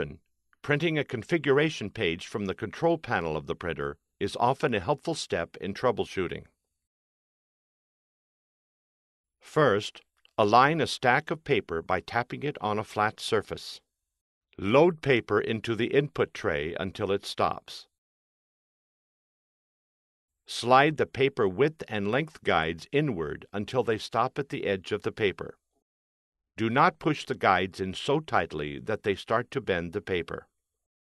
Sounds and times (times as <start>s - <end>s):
Speech: 0.0s - 6.6s, 9.4s - 13.9s, 14.6s - 18.0s, 20.5s - 25.6s, 26.6s - 30.5s.